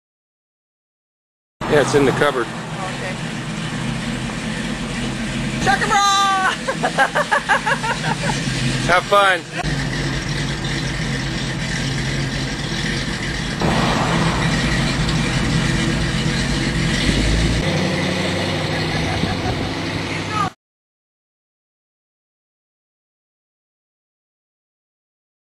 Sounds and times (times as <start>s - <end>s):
Truck: 1.6s - 20.6s
Speech: 1.7s - 3.2s, 5.6s - 6.6s, 8.9s - 9.6s, 20.3s - 20.6s.